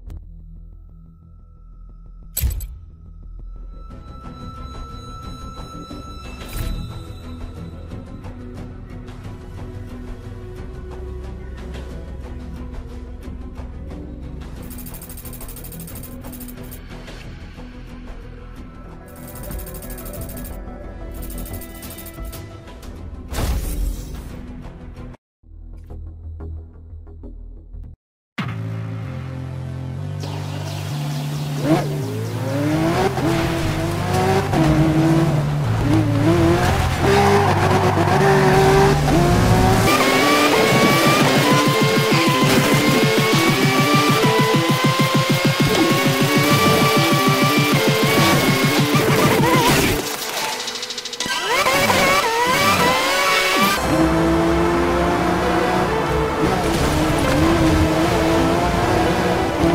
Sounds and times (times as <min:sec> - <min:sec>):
Music: 0:00.0 - 0:59.7.